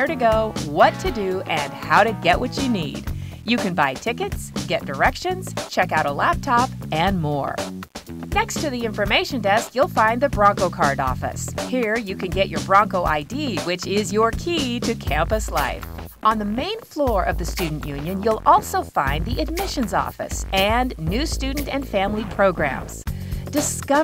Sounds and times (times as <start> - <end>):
Speech: 0.0 - 7.7, 8.4 - 24.0
Music: 0.0 - 24.0.